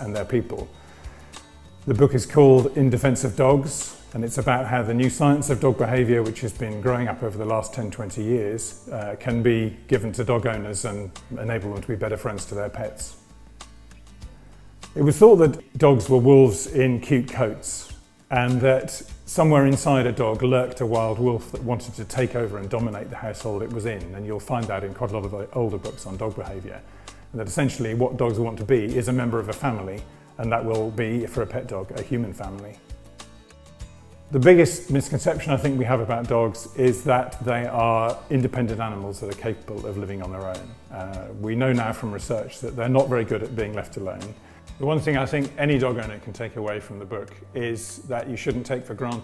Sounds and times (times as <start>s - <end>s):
Speech: 0.0s - 0.7s, 1.8s - 13.2s, 15.0s - 32.8s, 34.3s - 49.2s
Music: 0.0s - 49.2s.